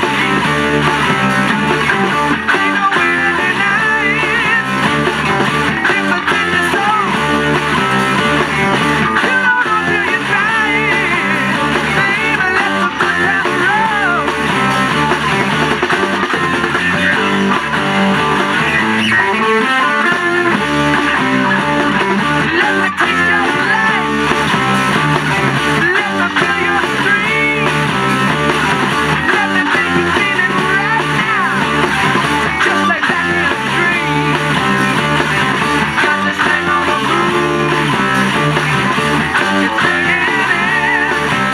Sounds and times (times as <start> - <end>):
Electric guitar: 0.0 - 41.5.